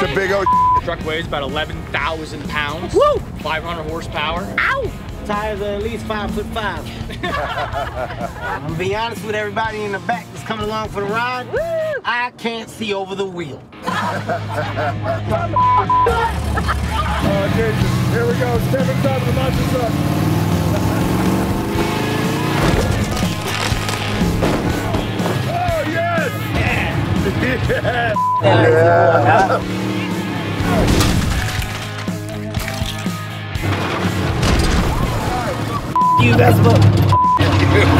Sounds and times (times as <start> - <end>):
Music: 0.0 - 12.0, 13.4 - 37.9.